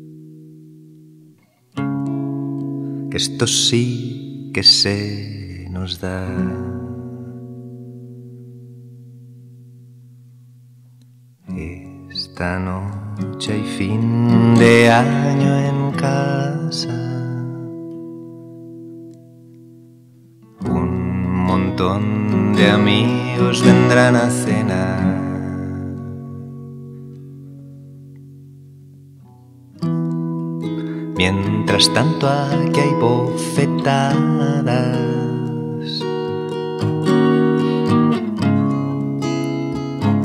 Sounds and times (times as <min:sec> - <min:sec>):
Music: 0:00.0 - 0:40.2.